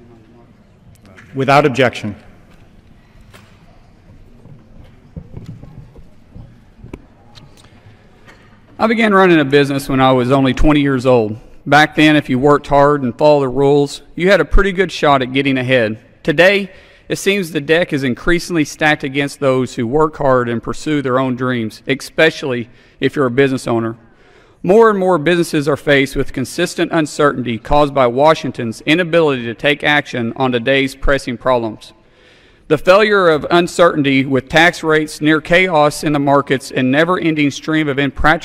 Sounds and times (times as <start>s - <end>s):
Male speech, man speaking: 0.0s - 2.3s, 8.8s - 24.0s, 24.7s - 32.0s, 32.7s - 38.4s
Narration, monologue: 0.0s - 3.0s, 6.9s - 38.4s.